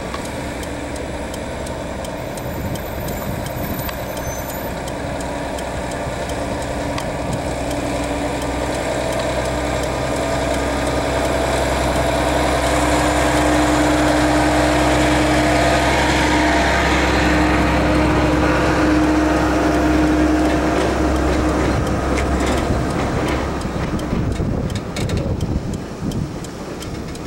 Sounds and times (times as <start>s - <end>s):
Truck: 0.0s - 27.2s.